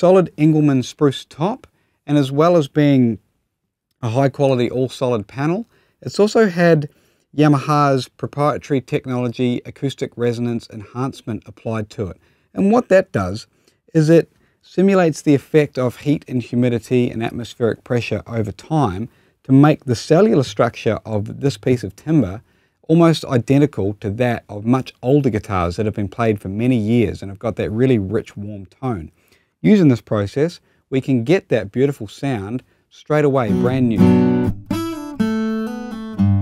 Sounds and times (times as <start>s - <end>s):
Speech: 0.0s - 3.2s, 4.0s - 34.1s.